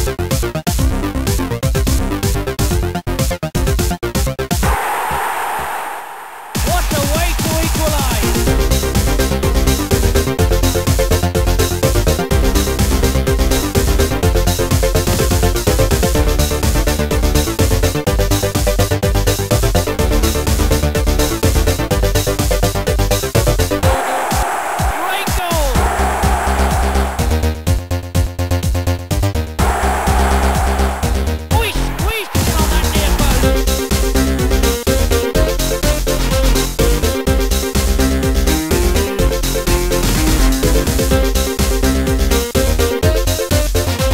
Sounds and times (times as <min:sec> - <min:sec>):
Music: 0:00.0 - 0:04.7, 0:06.6 - 0:44.1.